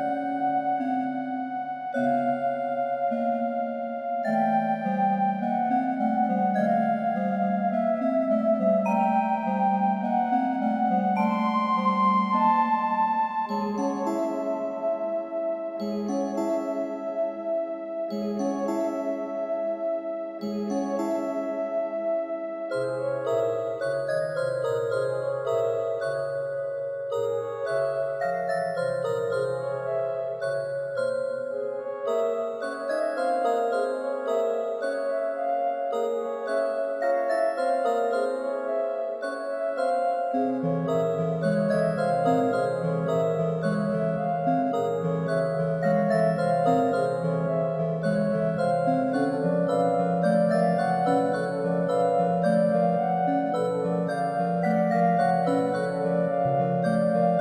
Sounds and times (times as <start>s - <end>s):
Glockenspiel: 0.0s - 57.4s.